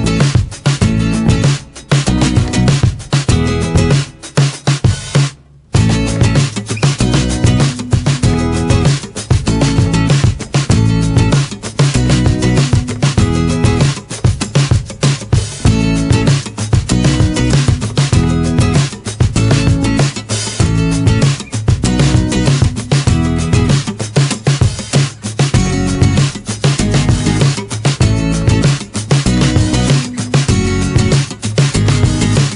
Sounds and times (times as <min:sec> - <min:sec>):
Music: 0:00.0 - 0:32.5.